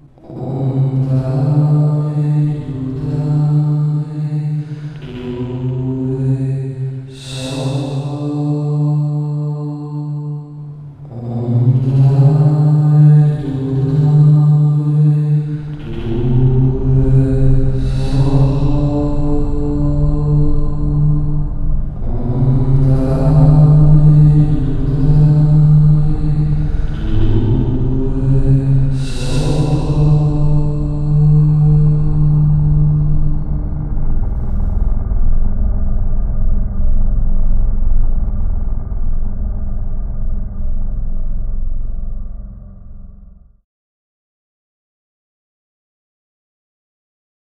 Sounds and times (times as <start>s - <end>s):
Mantra: 0.0s - 35.0s.